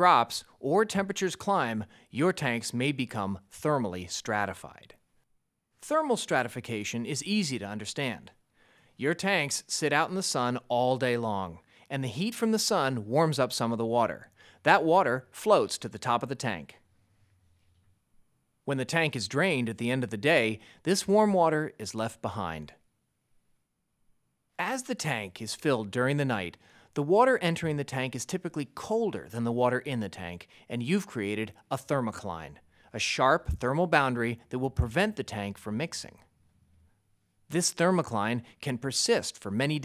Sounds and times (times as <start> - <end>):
Speech: 0.0 - 5.0, 5.8 - 8.4, 9.0 - 16.8, 18.7 - 22.8, 24.6 - 36.3, 37.5 - 39.8.